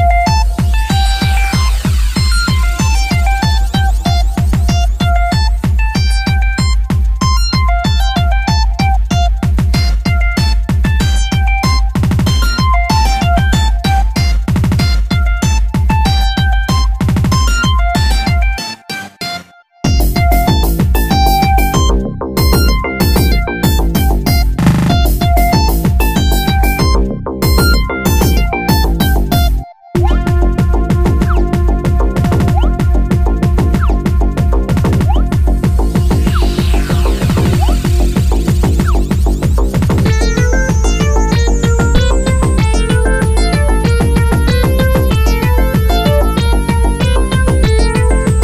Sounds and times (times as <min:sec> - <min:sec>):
Music: 0:00.0 - 0:48.4.